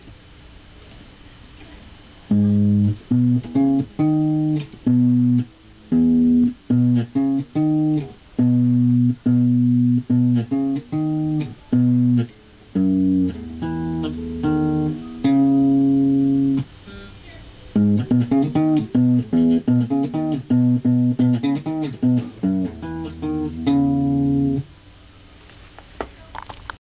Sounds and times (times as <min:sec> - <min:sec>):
Electric guitar: 0:02.3 - 0:24.7.